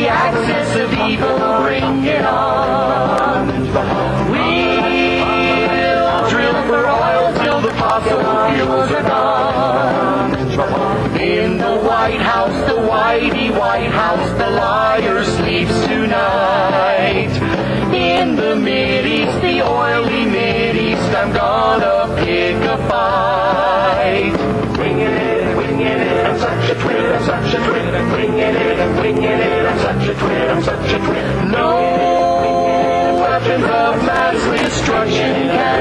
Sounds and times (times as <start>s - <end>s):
Music: 0.0s - 35.8s.